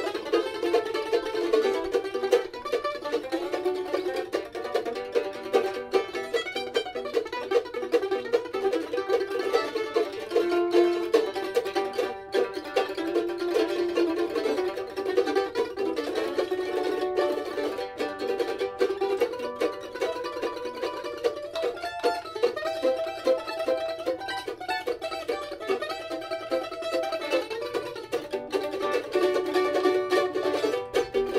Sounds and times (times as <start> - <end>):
Country: 0.0 - 31.3
Guitar: 0.0 - 31.3
Mandolin: 0.0 - 31.3.